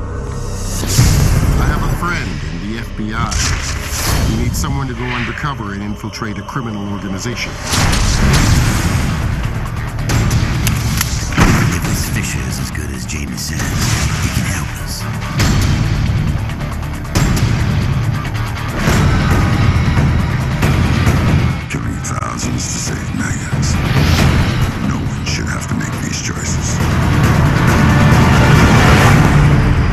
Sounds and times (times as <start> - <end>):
Music: 0.0 - 29.9
Speech: 1.6 - 3.5, 4.2 - 7.6, 11.6 - 15.0, 21.7 - 23.8, 24.8 - 26.8.